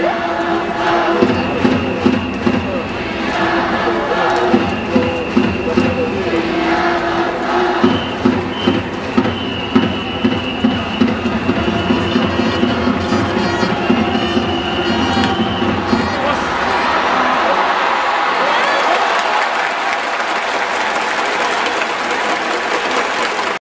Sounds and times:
Music: 0.0 - 16.4
Crowd: 0.0 - 23.6.

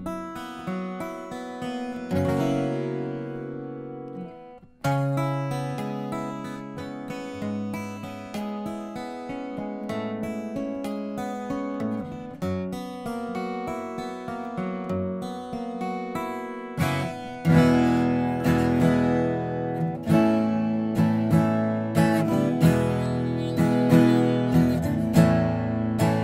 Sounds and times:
Acoustic guitar: 0.0 - 26.2
Strum: 16.8 - 26.2.

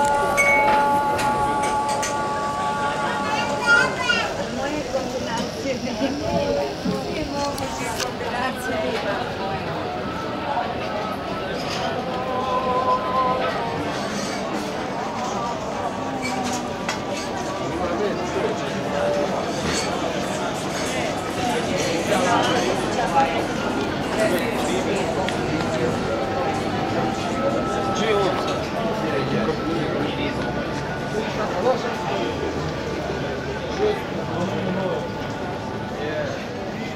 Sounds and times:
Speech: 1.1 - 36.9.

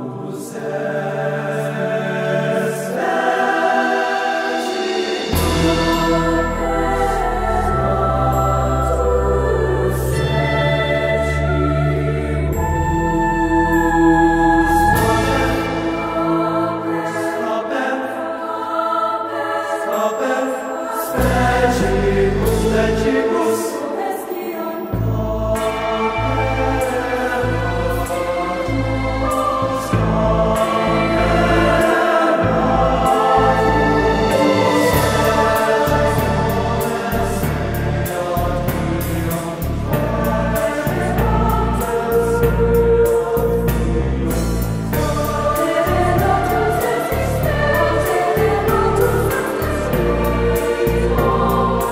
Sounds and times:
Music: 0.0 - 51.9.

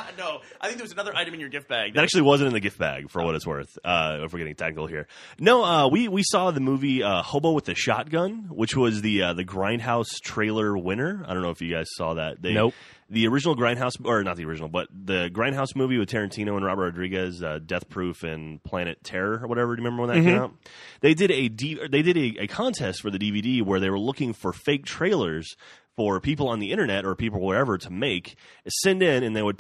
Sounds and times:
Speech: 0.0 - 29.6.

